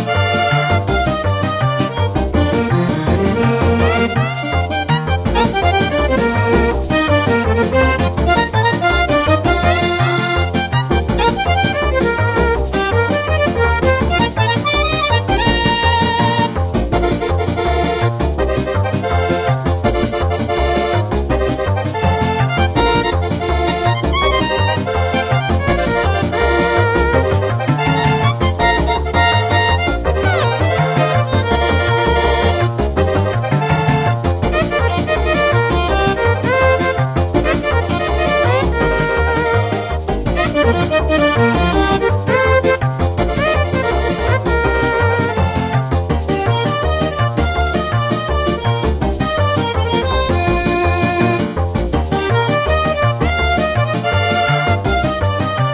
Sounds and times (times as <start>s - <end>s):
Video game music: 0.0s - 55.7s.